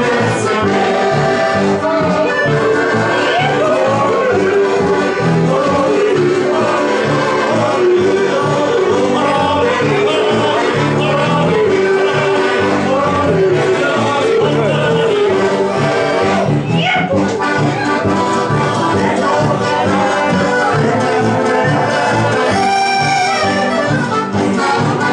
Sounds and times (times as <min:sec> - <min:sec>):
Folk music: 0:00.0 - 0:25.1
Rhythm and blues: 0:00.0 - 0:25.1.